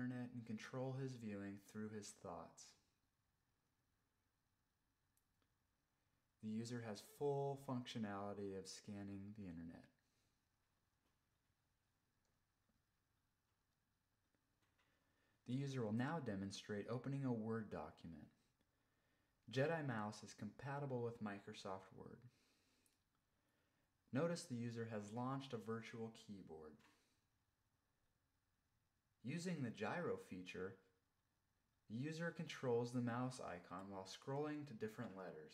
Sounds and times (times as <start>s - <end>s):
Speech: 0.0s - 2.9s, 6.4s - 10.0s, 15.4s - 18.5s, 19.4s - 22.4s, 24.1s - 27.0s, 29.2s - 31.0s, 31.9s - 35.5s.